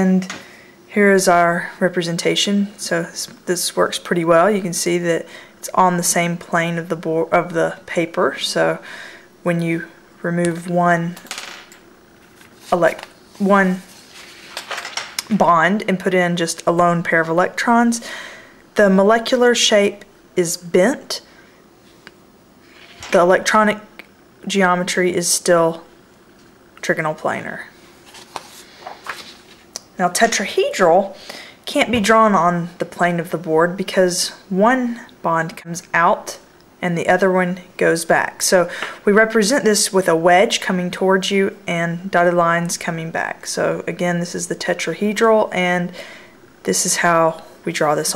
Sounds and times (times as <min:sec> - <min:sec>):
Speech: 0:00.0 - 0:00.3, 0:00.9 - 0:08.8, 0:09.4 - 0:11.2, 0:12.7 - 0:13.9, 0:15.2 - 0:18.0, 0:18.8 - 0:21.2, 0:23.0 - 0:25.9, 0:26.8 - 0:27.8, 0:29.8 - 0:46.0, 0:46.6 - 0:48.1
Inside, small room: 0:00.0 - 0:48.1.